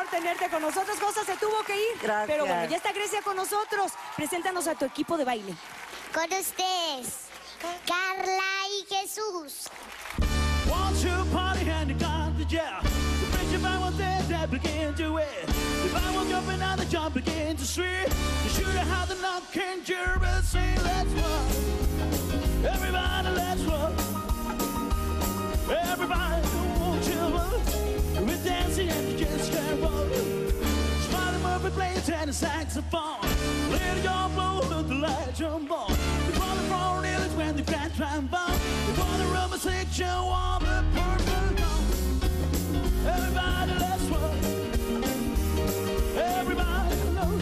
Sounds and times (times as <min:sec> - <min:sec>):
Rock and roll: 0:10.0 - 0:47.4.